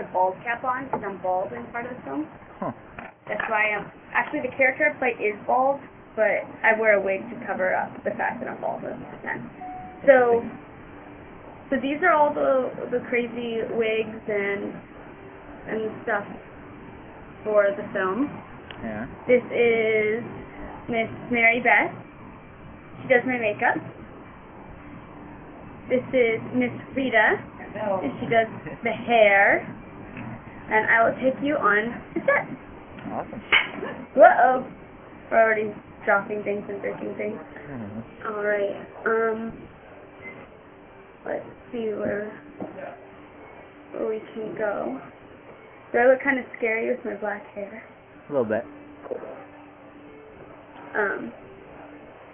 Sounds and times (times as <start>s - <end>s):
Speech: 0.0s - 9.4s, 10.1s - 10.5s, 17.5s - 20.3s, 35.4s - 39.6s, 46.0s - 49.4s, 51.0s - 51.4s.